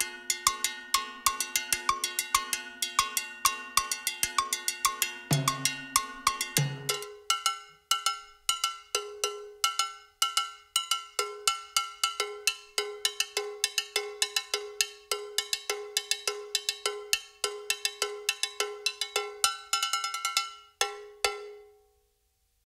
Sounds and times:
Cowbell: 0.0s - 21.8s.

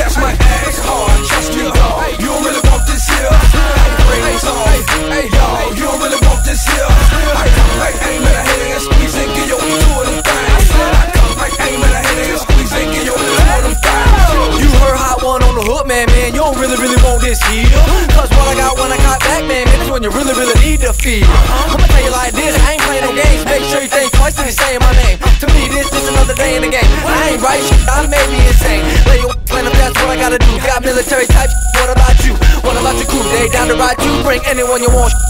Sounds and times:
Background music: 0.0s - 35.2s.

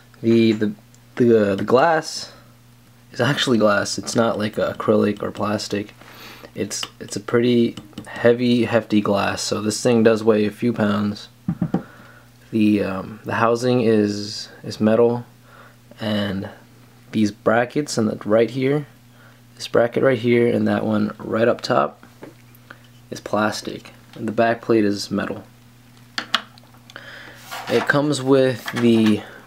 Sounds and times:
Speech: 0.2s - 2.4s, 3.1s - 5.9s, 6.6s - 11.4s, 12.5s - 15.3s, 16.0s - 19.0s, 19.6s - 22.0s, 23.1s - 25.5s, 27.6s - 29.4s.

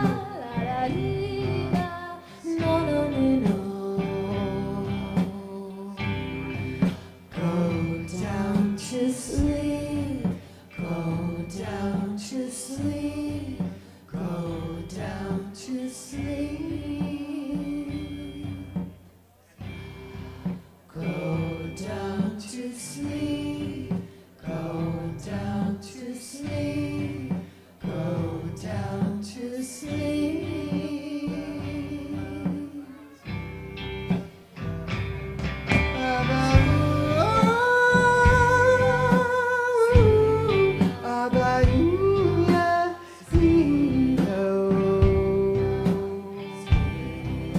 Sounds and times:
Singing: 0.0s - 19.0s, 20.6s - 33.4s, 35.7s - 47.5s.

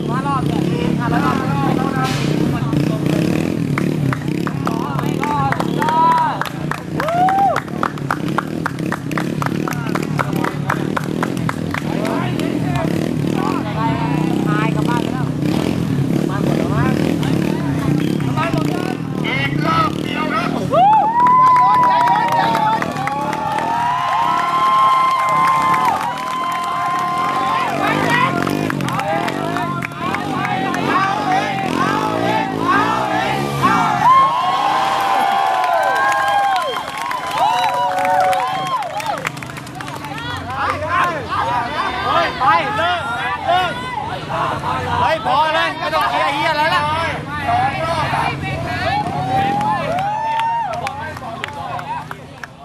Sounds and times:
Vehicle: 0.0s - 52.6s.

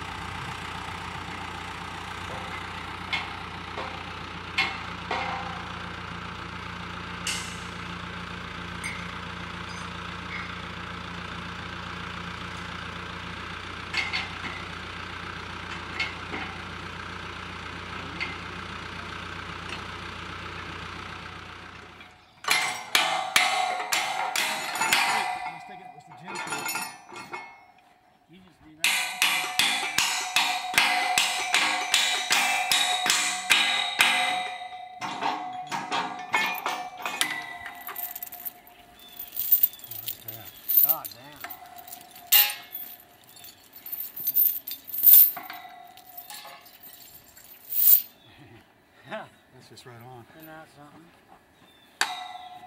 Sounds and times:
Speech: 25.3s - 26.6s, 28.3s - 29.0s, 40.2s - 41.5s, 48.3s - 51.2s.

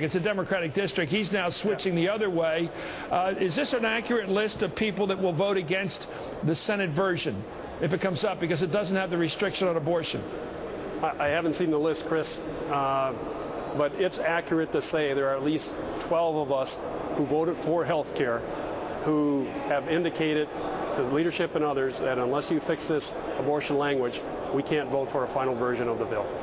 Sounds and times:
Speech: 0.0s - 10.2s, 11.0s - 13.2s, 13.8s - 18.4s, 19.0s - 26.3s.

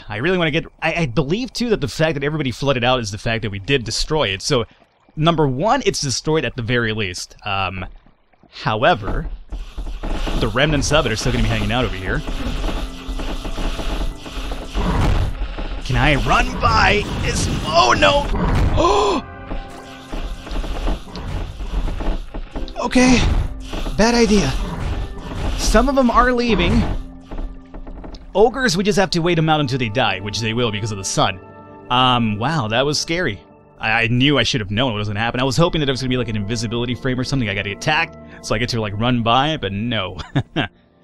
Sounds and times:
Speech: 0.0s - 7.9s, 8.6s - 9.3s, 10.4s - 12.2s, 15.9s - 19.2s, 22.8s - 23.3s, 24.0s - 24.6s, 25.6s - 26.9s, 28.3s - 40.7s
Music: 8.8s - 41.0s.

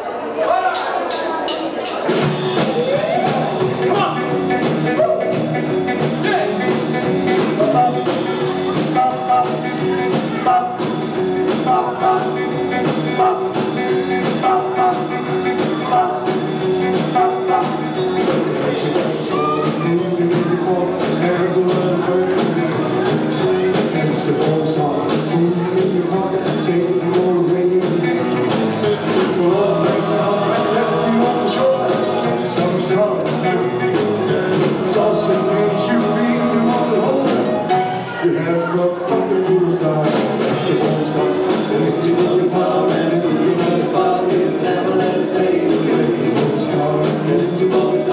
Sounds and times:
Rock and roll: 0.4s - 48.1s.

